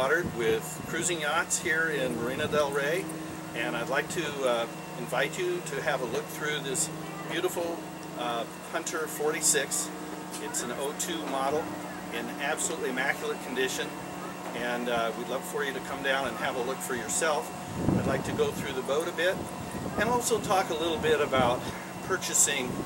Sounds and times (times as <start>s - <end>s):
Speech: 0.0s - 13.9s, 14.5s - 19.4s, 20.0s - 22.8s.